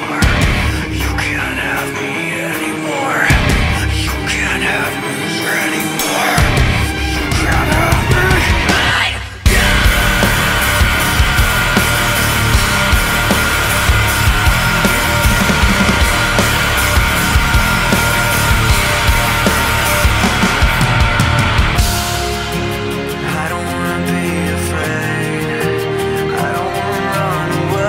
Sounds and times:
Music: 0.0 - 27.8.

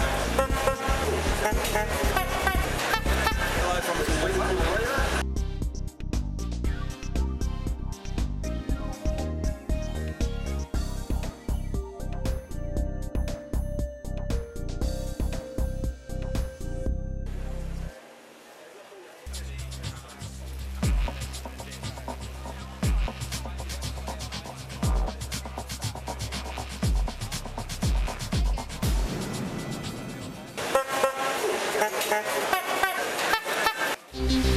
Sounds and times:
Music: 0.0 - 18.2, 19.3 - 34.5
Speech: 3.1 - 5.2, 18.4 - 27.6.

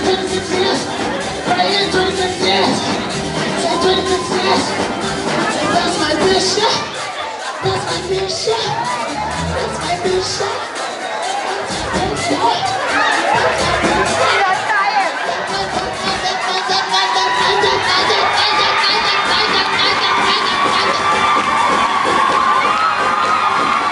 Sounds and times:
Inside, large room or hall: 0.0 - 23.9
Music: 0.0 - 23.9.

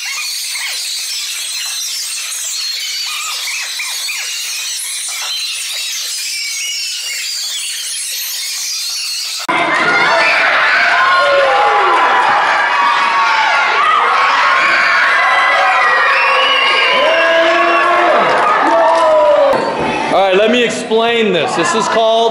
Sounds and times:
Inside, large room or hall: 0.0 - 22.3
Inside, public space: 0.0 - 22.3.

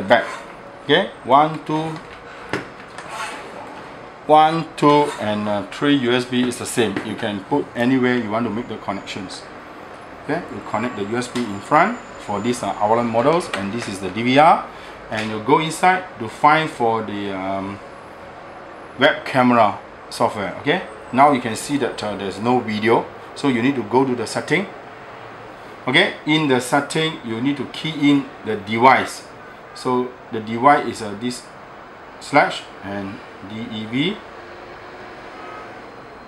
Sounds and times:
Speech: 0.0 - 2.1, 4.3 - 9.5, 10.2 - 17.8, 19.0 - 24.7, 25.9 - 31.5, 32.2 - 34.2.

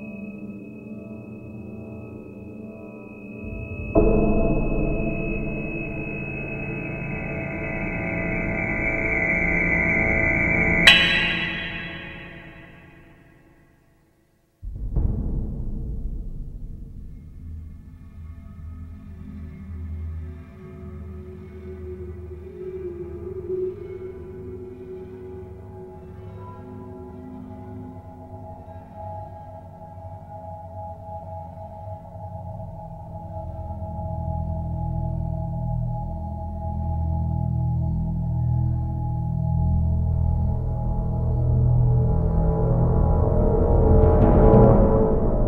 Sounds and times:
Soundtrack music: 5.1 - 13.0.

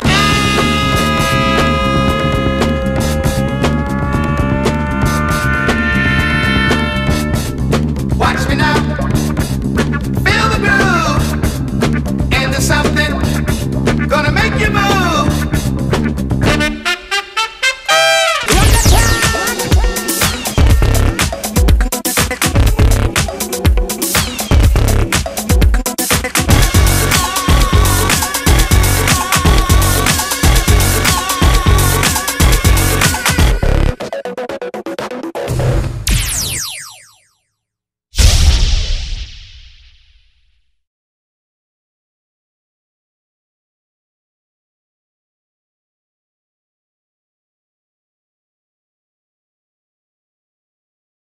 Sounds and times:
Music: 0.0 - 36.2.

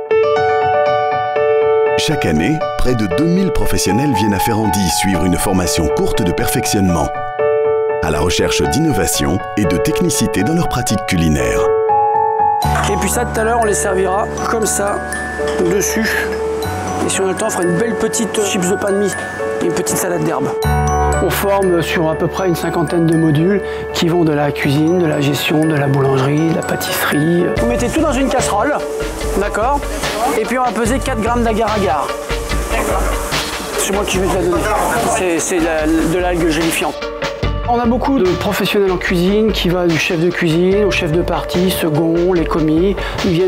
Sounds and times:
Music: 0.0 - 43.4
Speech: 2.0 - 7.2, 8.0 - 11.7, 21.2 - 28.8, 37.7 - 43.4.

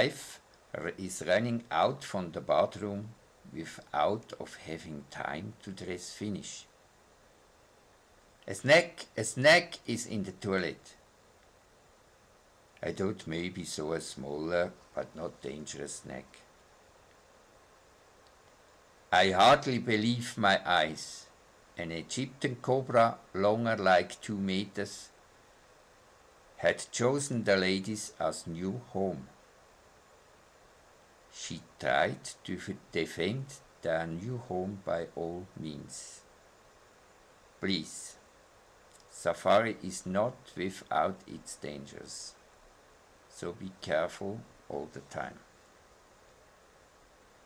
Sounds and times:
Speech: 0.0 - 6.8, 8.5 - 11.0, 12.8 - 16.5, 19.2 - 25.2, 26.6 - 29.4, 31.3 - 36.3, 37.6 - 38.2, 39.0 - 42.4, 43.3 - 45.5
Inside, small room: 0.0 - 47.4.

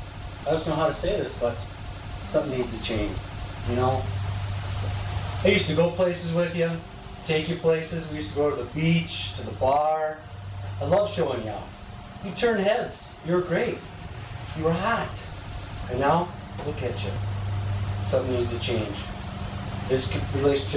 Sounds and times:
Speech: 0.5 - 1.6, 2.3 - 4.2, 5.4 - 10.2, 10.8 - 13.9, 14.5 - 15.3, 15.9 - 17.2, 18.0 - 19.1, 19.9 - 20.7.

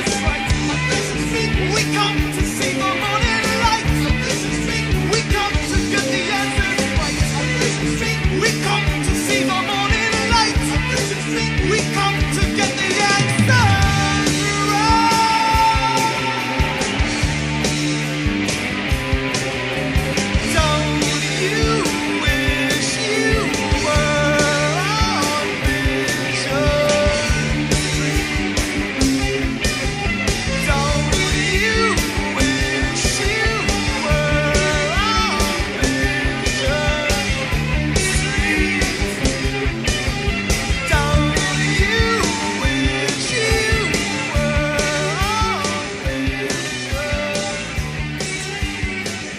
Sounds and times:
Psychedelic rock: 0.0 - 49.3.

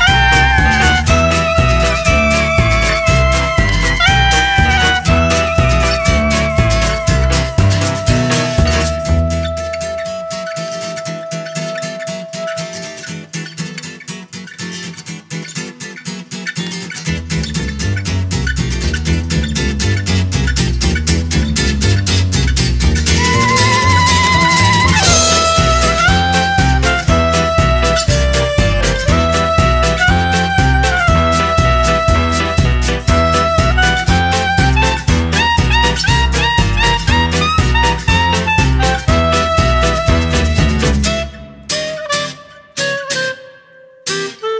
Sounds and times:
Swing music: 0.0 - 13.9, 17.0 - 44.5.

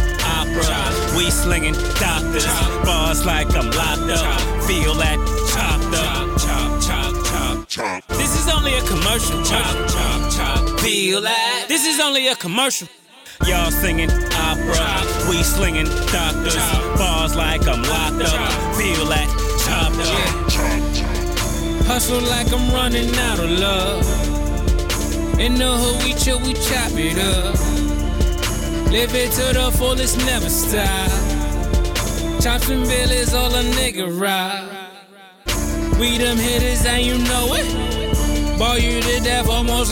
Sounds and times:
Music: 0.0 - 11.8, 13.4 - 34.0, 35.5 - 39.9.

